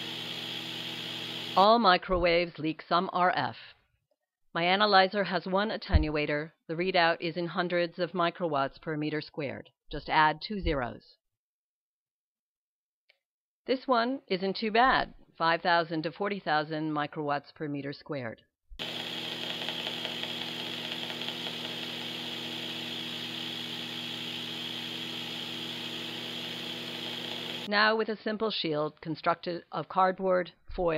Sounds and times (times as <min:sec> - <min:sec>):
Speech: 0:01.6 - 0:03.8, 0:04.6 - 0:11.2, 0:13.7 - 0:18.4, 0:27.7 - 0:30.9.